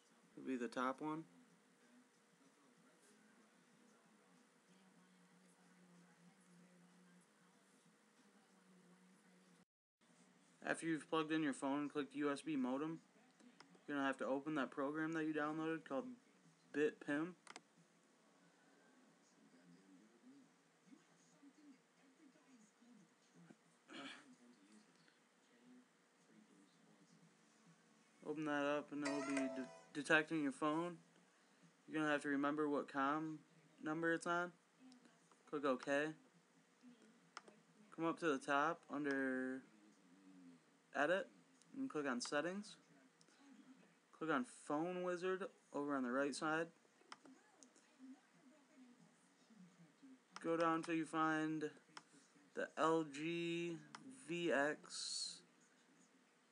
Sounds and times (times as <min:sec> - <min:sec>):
Speech: 0:00.0 - 0:09.7, 0:10.6 - 0:17.5, 0:18.3 - 0:31.2, 0:31.9 - 0:56.5.